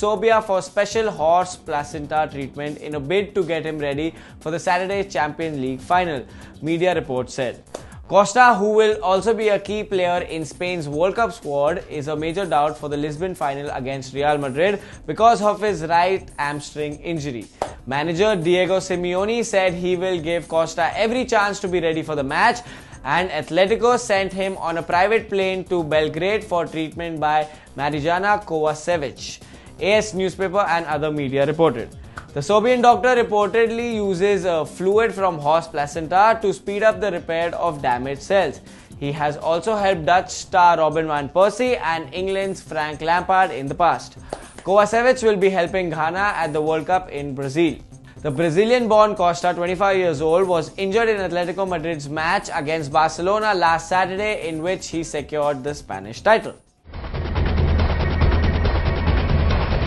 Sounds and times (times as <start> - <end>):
Speech: 0.0 - 56.6
Music: 0.0 - 59.8.